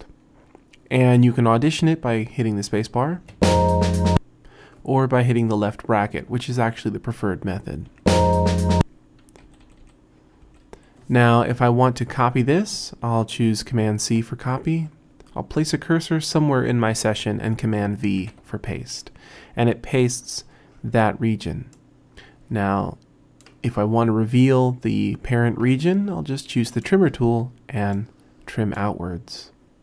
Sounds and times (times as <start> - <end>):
Speech: 0.9 - 3.3, 4.8 - 8.0, 11.1 - 21.8, 22.5 - 29.6
Music: 3.3 - 4.2, 8.1 - 8.9.